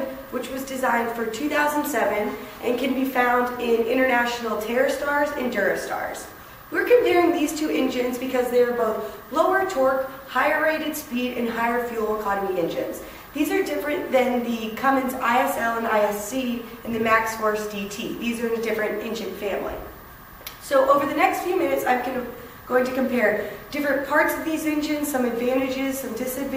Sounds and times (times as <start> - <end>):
Female speech, woman speaking: 0.0 - 19.9, 20.6 - 26.5.